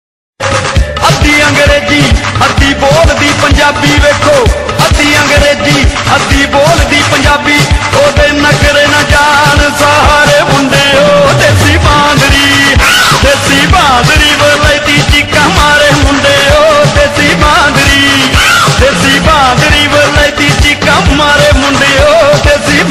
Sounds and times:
Music: 0.4 - 22.9.

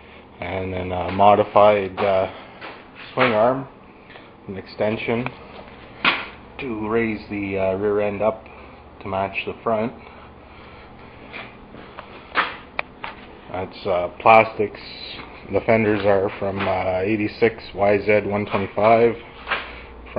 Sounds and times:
Speech: 0.4 - 2.4, 3.2 - 3.8, 4.5 - 5.4, 6.6 - 10.0, 13.5 - 19.2.

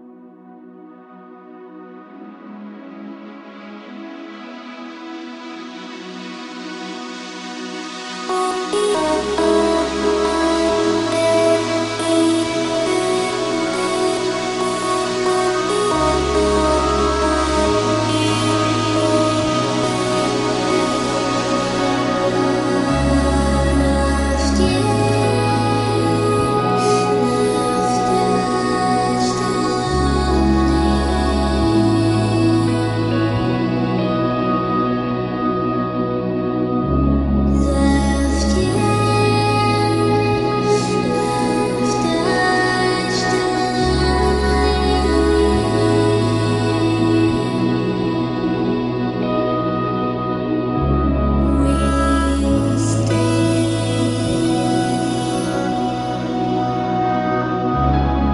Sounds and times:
Lullaby: 0.0 - 58.3.

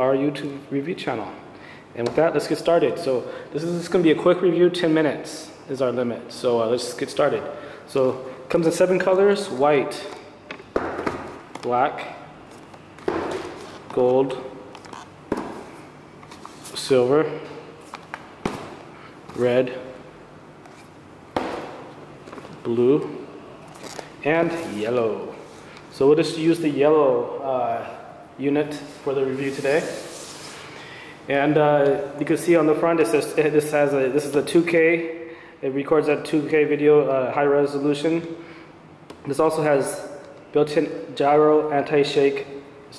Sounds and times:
Speech: 0.0 - 1.4, 2.0 - 10.2, 11.6 - 12.3, 13.9 - 14.5, 16.7 - 17.5, 19.3 - 20.0, 22.6 - 23.2, 24.2 - 30.1, 31.3 - 38.4, 39.3 - 42.9.

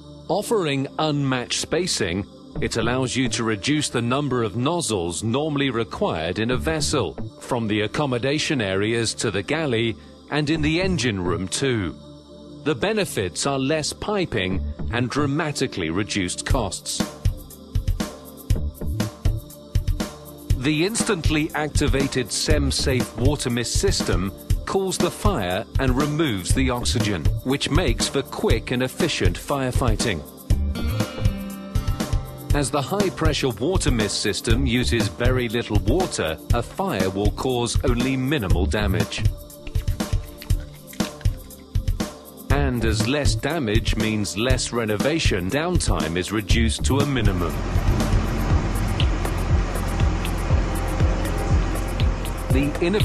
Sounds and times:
Music: 0.0 - 53.0
Speech: 0.3 - 12.0, 12.7 - 17.1, 20.6 - 30.3, 32.6 - 39.3, 42.5 - 47.6, 52.5 - 53.0.

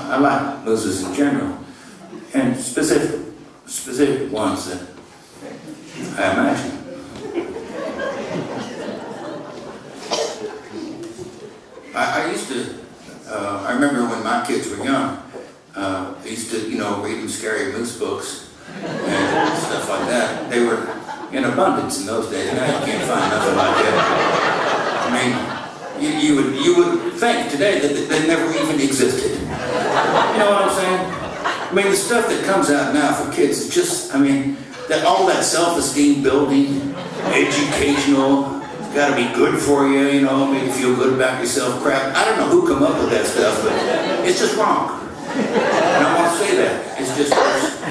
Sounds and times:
Speech: 0.0 - 5.0, 5.7 - 7.1, 11.9 - 24.3, 25.0 - 47.9.

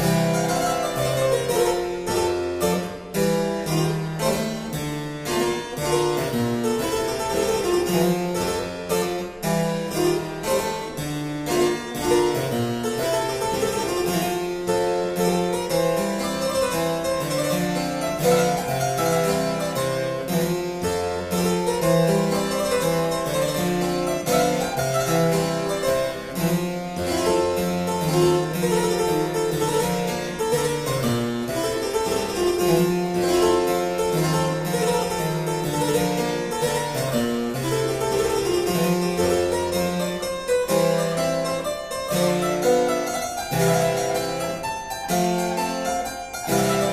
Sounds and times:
Harpsichord: 0.0 - 46.9.

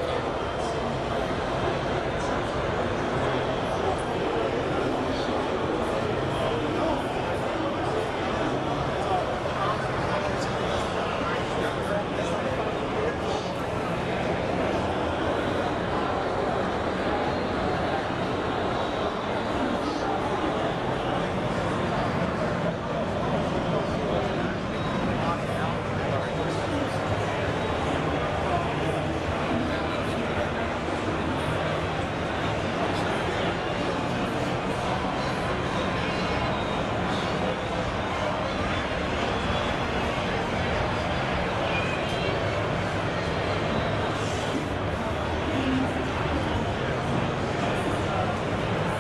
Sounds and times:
Speech: 0.0 - 49.0.

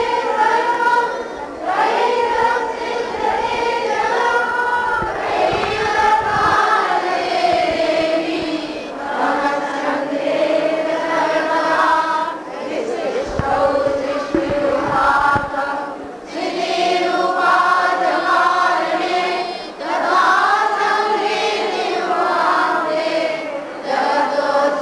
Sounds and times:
Mantra: 0.0 - 24.8.

